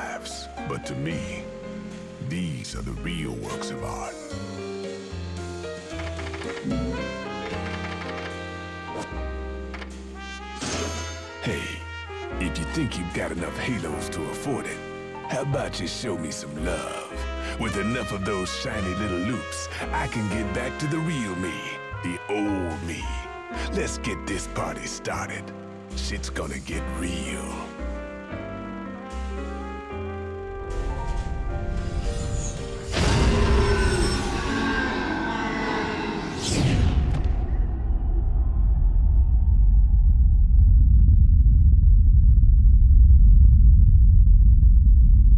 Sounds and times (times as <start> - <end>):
Speech: 0.0 - 1.4, 2.2 - 4.2, 11.4 - 11.8, 12.4 - 27.7
Music: 0.0 - 38.9.